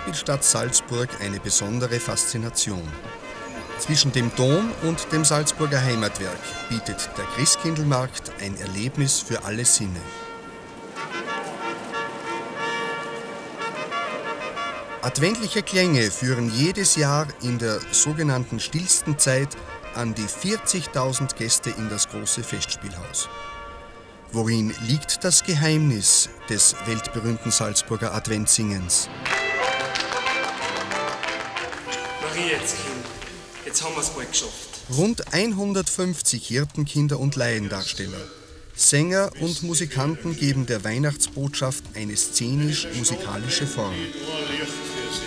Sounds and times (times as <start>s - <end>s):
Speech: 0.0s - 3.0s, 3.8s - 10.1s, 15.0s - 23.3s, 24.3s - 29.1s, 31.9s - 33.0s, 33.6s - 45.2s
Music: 0.0s - 35.9s, 38.4s - 45.2s.